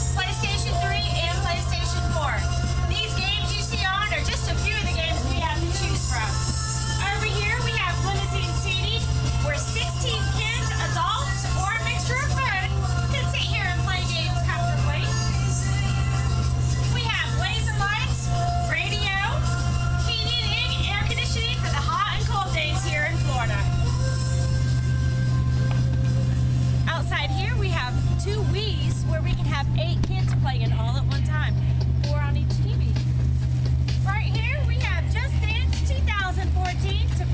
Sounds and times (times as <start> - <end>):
Music: 0.0 - 37.3
Speech: 0.2 - 6.4, 7.0 - 15.2, 17.0 - 19.4, 20.1 - 23.8, 26.9 - 33.0, 34.0 - 37.3.